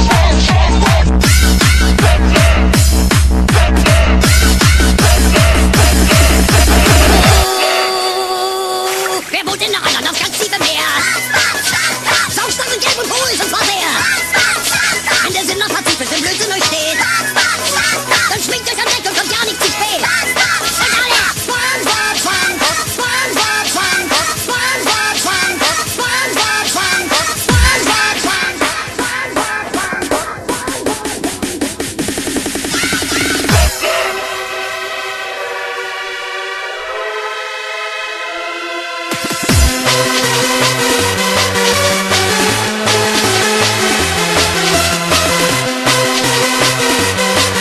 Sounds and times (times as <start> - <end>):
Soundtrack music: 0.0 - 47.6
Techno: 0.0 - 47.6.